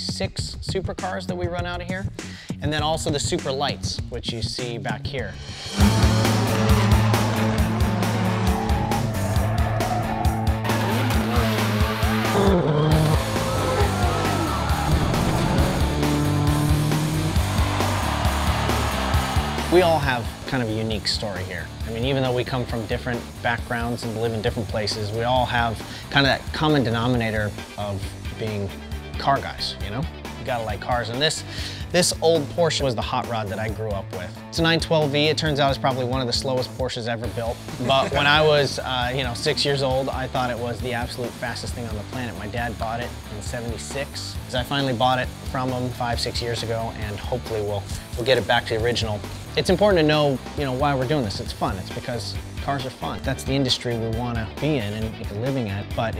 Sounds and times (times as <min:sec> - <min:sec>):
Music: 0:00.0 - 0:56.1.